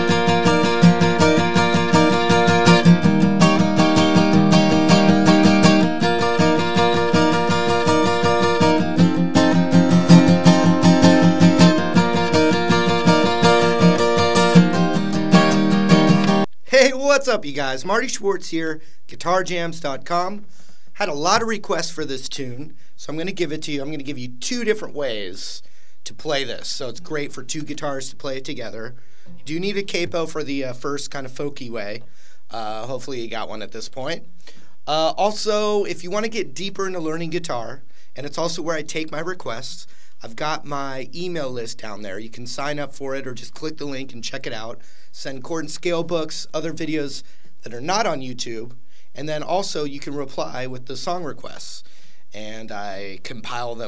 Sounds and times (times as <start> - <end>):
Speech: 16.7 - 20.4, 21.0 - 34.3, 34.9 - 53.8.